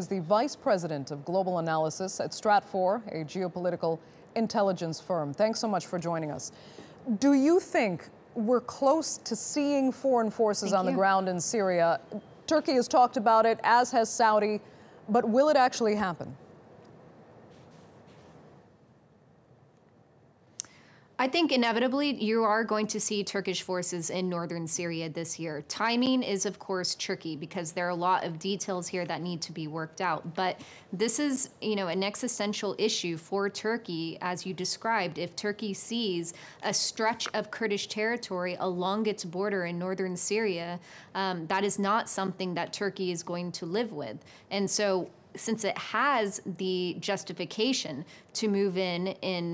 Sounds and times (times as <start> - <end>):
Speech: 7.1 - 16.4, 21.2 - 49.5.